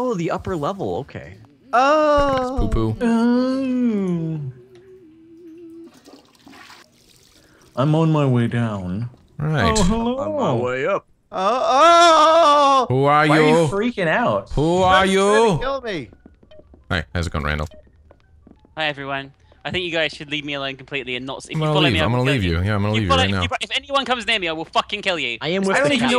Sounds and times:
Speech: 0:07.8 - 0:10.8, 0:18.8 - 0:26.1.

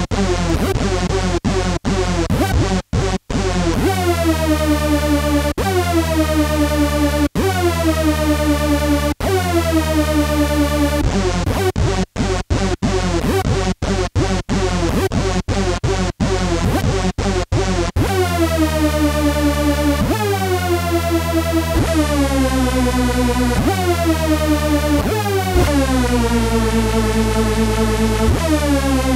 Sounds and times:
Music: 0:00.0 - 0:29.1.

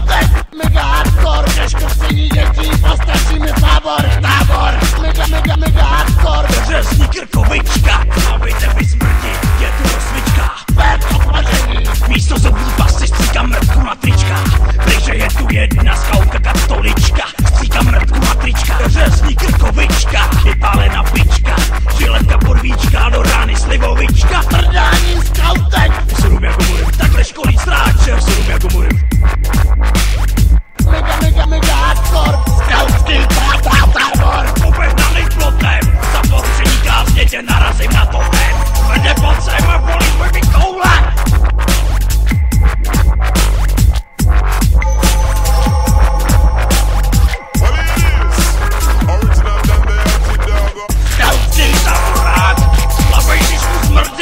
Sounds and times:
Dubstep: 0:00.0 - 0:54.2.

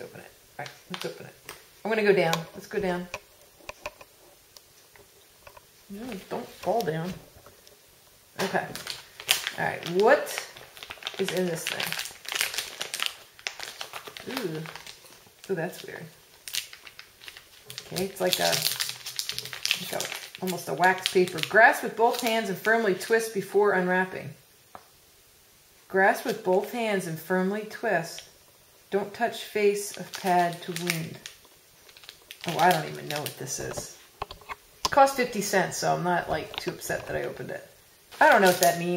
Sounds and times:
Speech: 0:00.0 - 0:03.2, 0:05.9 - 0:07.2, 0:08.4 - 0:08.8, 0:09.6 - 0:10.6, 0:11.2 - 0:12.0, 0:14.2 - 0:14.8, 0:15.5 - 0:16.2, 0:17.9 - 0:18.7, 0:19.8 - 0:24.4, 0:25.9 - 0:28.3, 0:28.9 - 0:31.3, 0:32.5 - 0:34.0, 0:34.9 - 0:38.9
Inside, small room: 0:00.0 - 0:38.9
Crumpling, crinkling: 0:00.6 - 0:01.7, 0:08.4 - 0:23.1, 0:29.8 - 0:35.6, 0:38.1 - 0:38.9.

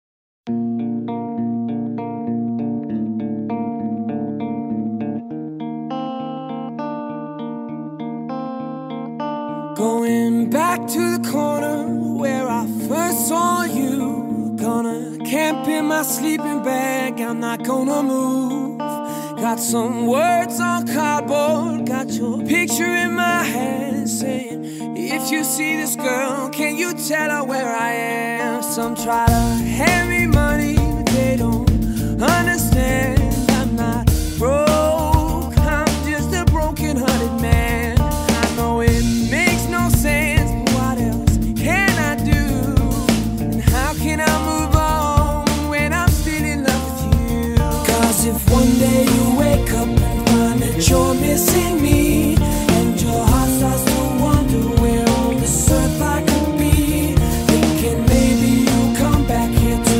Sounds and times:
Effects unit: 0:00.5 - 0:59.9.

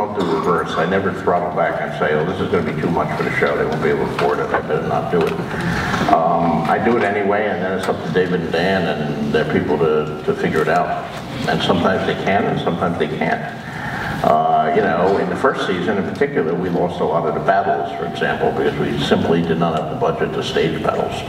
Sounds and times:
Male speech, man speaking: 0:00.0 - 0:13.6, 0:14.2 - 0:21.2.

